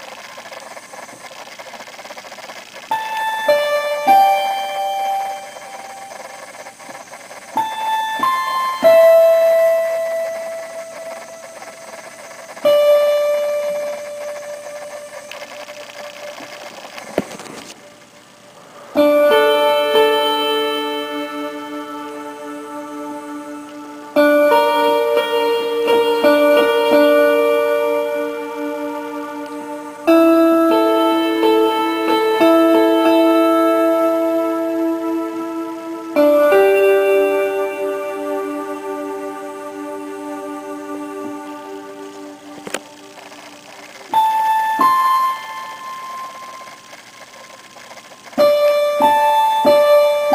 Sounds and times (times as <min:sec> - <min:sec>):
Music: 0:02.9 - 0:06.9, 0:07.6 - 0:16.5, 0:19.0 - 0:47.1, 0:48.3 - 0:50.3.